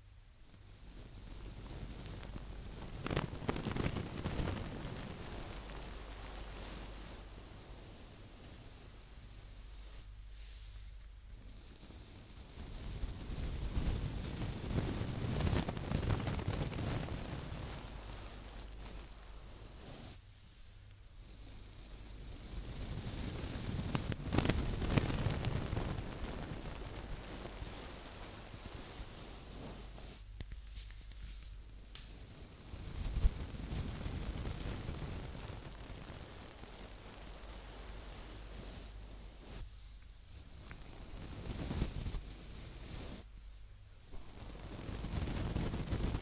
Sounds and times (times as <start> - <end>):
Inside, small room: 0.0 - 46.2.